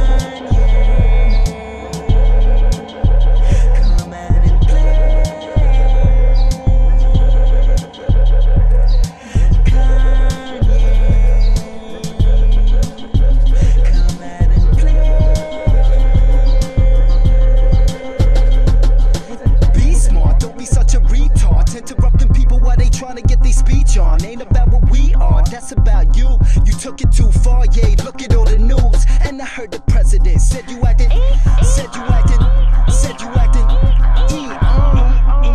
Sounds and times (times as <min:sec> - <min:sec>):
Music: 0:00.0 - 0:35.5.